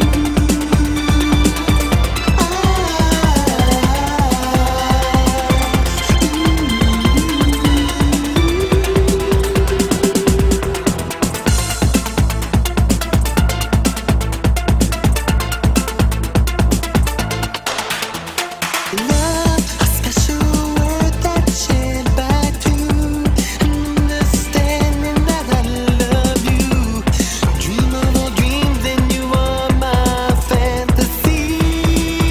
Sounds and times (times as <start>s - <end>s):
Exciting music: 0.0s - 32.3s.